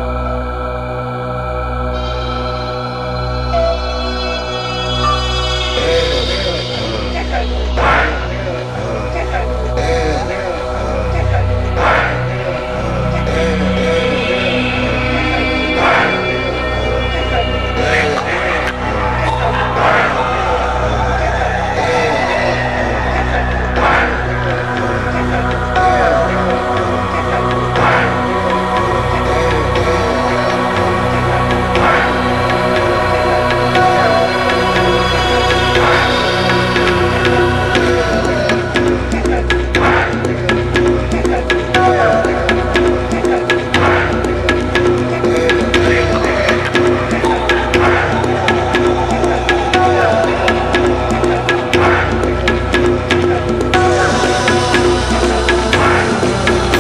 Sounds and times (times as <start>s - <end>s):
Music: 0.0s - 56.8s.